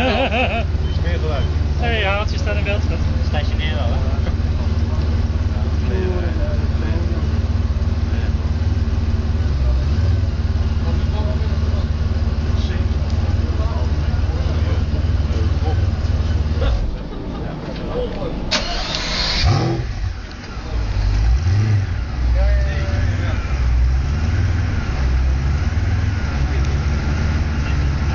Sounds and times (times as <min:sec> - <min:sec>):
Car: 0:00.0 - 0:28.1
Speech: 0:01.0 - 0:07.4, 0:10.8 - 0:18.5, 0:22.3 - 0:23.6
Accelerating, revving, vroom: 0:19.4 - 0:20.0, 0:20.9 - 0:22.4, 0:23.0 - 0:28.1.